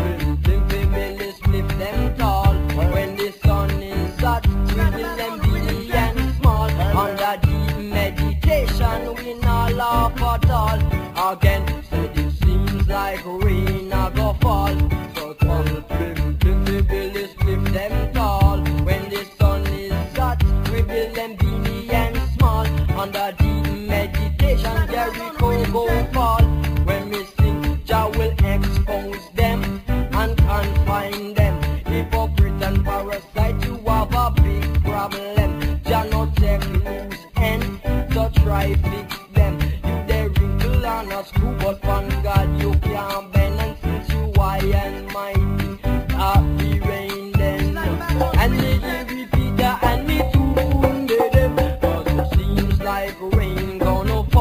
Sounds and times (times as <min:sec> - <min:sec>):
Music: 0:00.0 - 0:54.4.